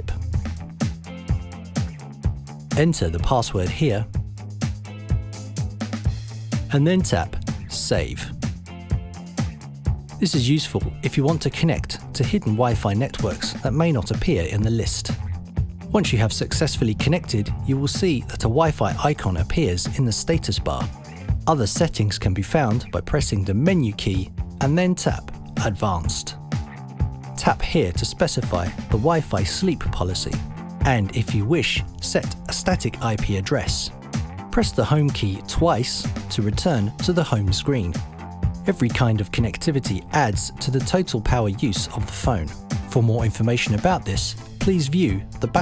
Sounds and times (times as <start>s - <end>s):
Speech: 0.0s - 0.2s, 2.8s - 4.2s, 6.7s - 8.4s, 10.2s - 15.2s, 15.9s - 26.4s, 27.4s - 38.0s, 38.6s - 45.6s
Music: 0.0s - 45.6s.